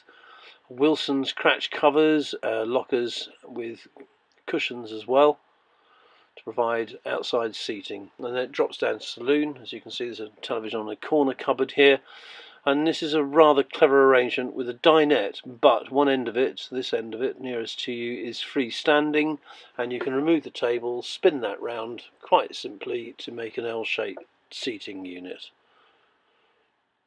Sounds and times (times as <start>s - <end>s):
Speech: 0.7s - 5.4s, 6.4s - 25.6s.